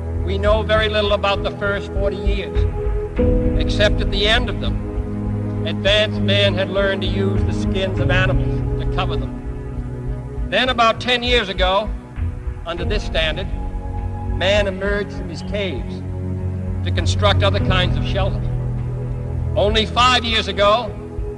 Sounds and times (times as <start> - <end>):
Music: 0.0 - 21.3
Narration, monologue: 0.0 - 21.3
Male speech, man speaking: 0.3 - 2.6, 3.6 - 4.8, 5.7 - 9.3, 10.5 - 11.9, 12.7 - 13.5, 14.4 - 16.0, 16.9 - 18.5, 19.6 - 21.0.